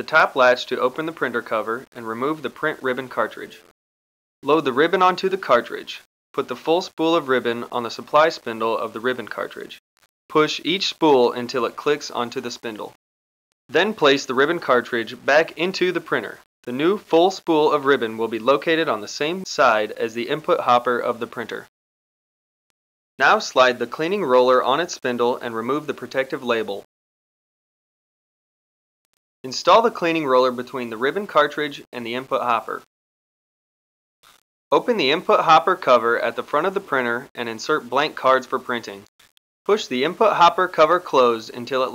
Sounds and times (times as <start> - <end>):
Speech: 0.0 - 3.6, 4.4 - 13.0, 13.7 - 21.7, 23.2 - 26.9, 29.5 - 32.9, 34.7 - 39.1, 39.7 - 41.9.